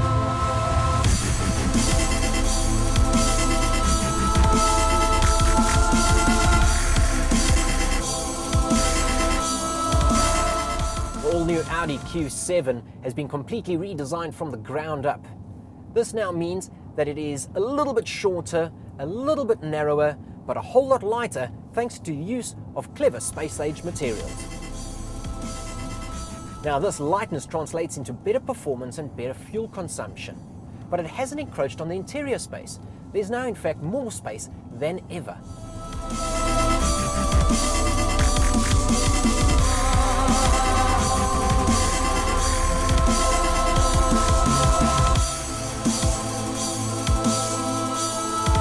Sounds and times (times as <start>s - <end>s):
Music: 0.0s - 12.3s, 23.3s - 27.4s, 35.5s - 48.6s
Speech: 11.2s - 15.4s, 16.0s - 24.3s, 26.6s - 35.4s.